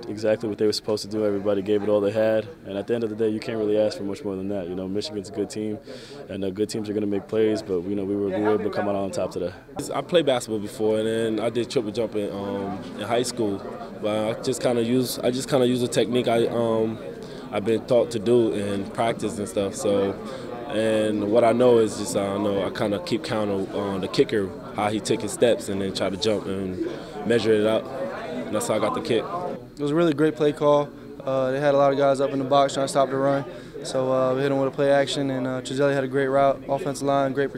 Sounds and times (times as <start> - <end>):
Speech: 0.0 - 37.5.